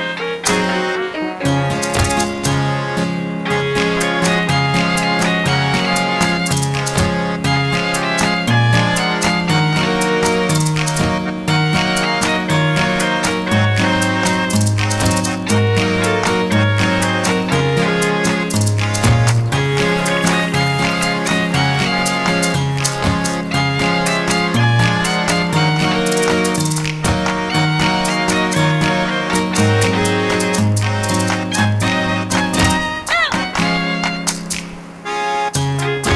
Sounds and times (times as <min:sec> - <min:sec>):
Music: 0:00.0 - 0:36.1.